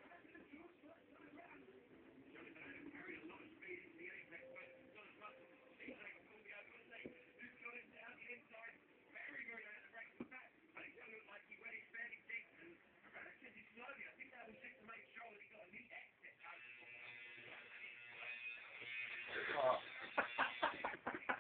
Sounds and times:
Speech: 0:00.0 - 0:17.0
Electric shaver, electric razor: 0:16.4 - 0:21.4.

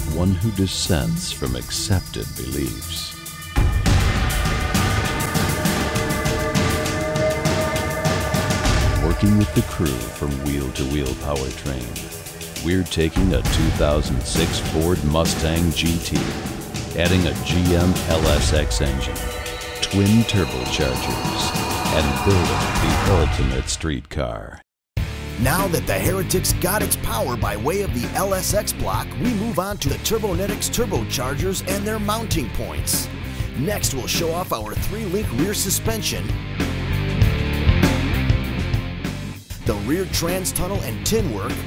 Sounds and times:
Speech: 0:00.0 - 0:03.2, 0:09.0 - 0:12.0, 0:12.6 - 0:16.3, 0:17.0 - 0:19.2, 0:19.8 - 0:24.6, 0:25.4 - 0:36.4, 0:39.6 - 0:41.6
Music: 0:00.0 - 0:23.8, 0:25.0 - 0:41.6.

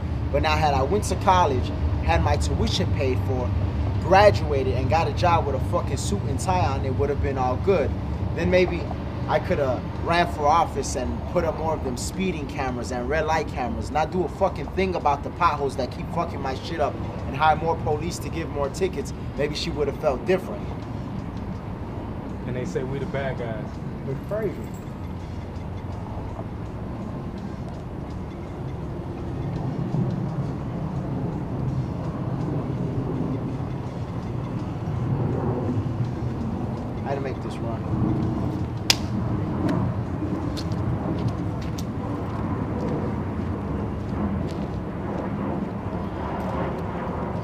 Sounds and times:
Speech: 0:00.4 - 0:20.7, 0:22.5 - 0:24.7, 0:37.0 - 0:37.9.

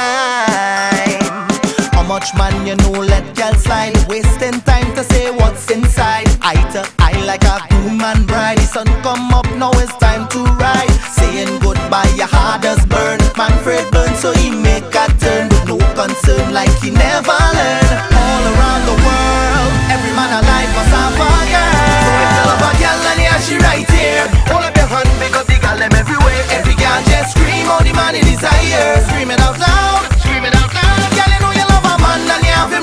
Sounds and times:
Music: 0:00.0 - 0:32.8.

